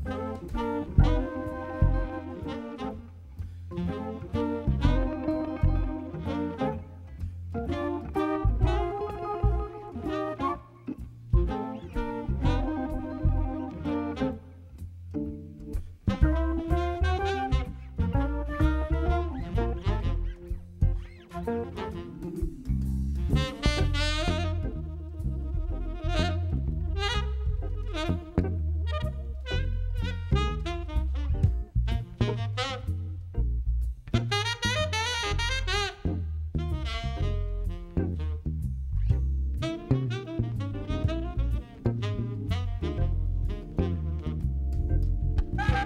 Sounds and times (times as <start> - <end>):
Music: 0.0 - 45.8.